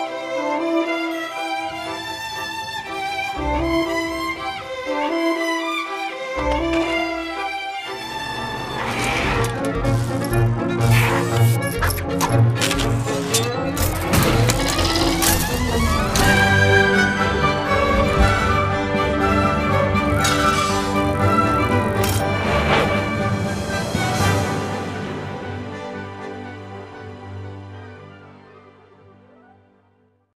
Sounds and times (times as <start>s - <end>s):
Music: 0.0s - 30.3s.